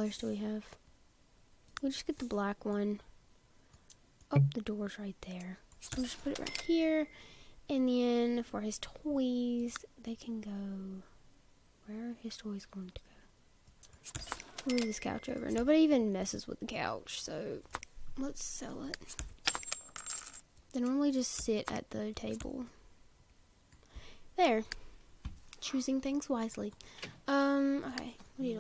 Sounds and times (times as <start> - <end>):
Speech: 0.0 - 0.8, 1.8 - 3.1, 4.3 - 7.1, 7.7 - 11.1, 11.8 - 13.2, 14.7 - 19.0, 20.8 - 22.8, 24.4 - 24.7, 25.6 - 28.6.